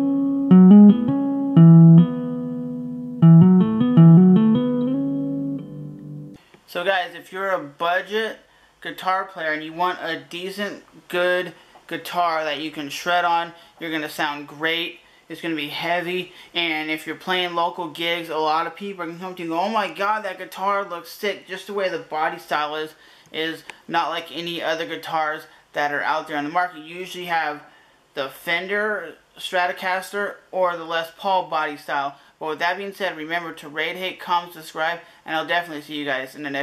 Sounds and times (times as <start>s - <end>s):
Electric guitar: 0.0s - 6.4s
Electronic tuner: 0.0s - 6.4s
Inside, small room: 0.0s - 36.6s
Speech: 6.7s - 36.6s.